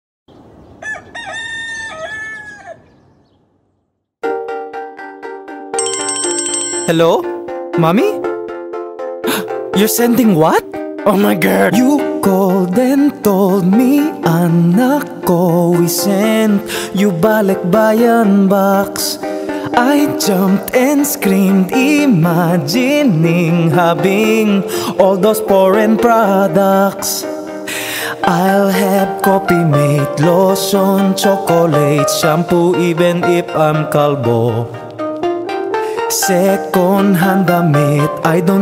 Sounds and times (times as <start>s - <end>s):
Outside, rural or natural: 0.3s - 4.2s
Fowl: 0.8s - 2.9s
Music: 4.2s - 38.6s
Speech: 7.8s - 8.2s, 9.8s - 11.9s.